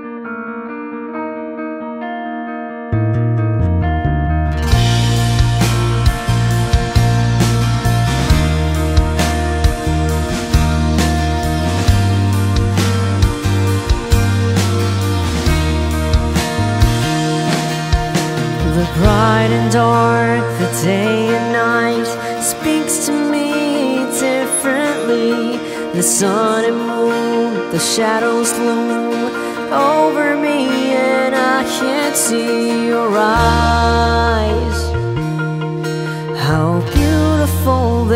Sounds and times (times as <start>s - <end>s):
Exciting music: 4.6s - 21.0s.